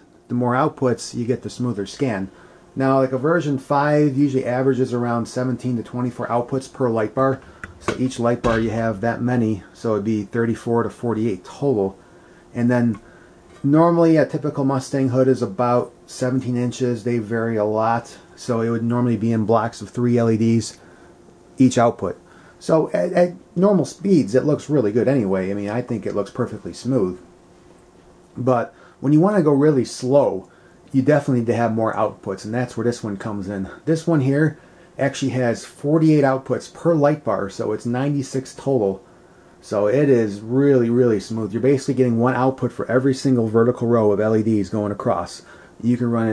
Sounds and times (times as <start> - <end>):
Speech: 0.3 - 13.0, 13.6 - 20.8, 21.6 - 27.3, 28.4 - 39.0, 39.6 - 46.3.